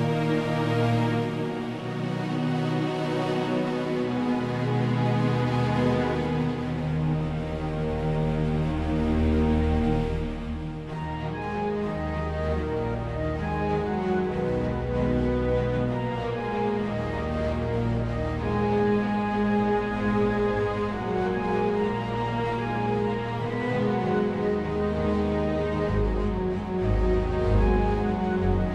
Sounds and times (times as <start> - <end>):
Music: 0.0 - 28.7.